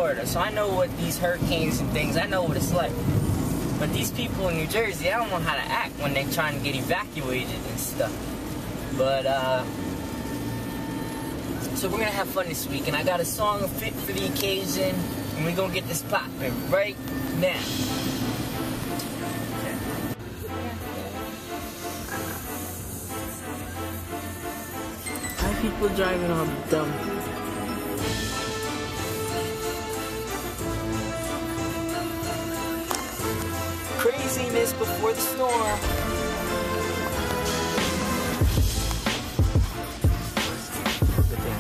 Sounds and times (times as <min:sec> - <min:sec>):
Speech: 0:00.0 - 0:03.0, 0:03.8 - 0:08.2, 0:11.6 - 0:17.7, 0:25.4 - 0:27.1, 0:34.0 - 0:35.8
Music: 0:00.0 - 0:08.9, 0:11.3 - 0:41.6
Vehicle: 0:00.0 - 0:41.6.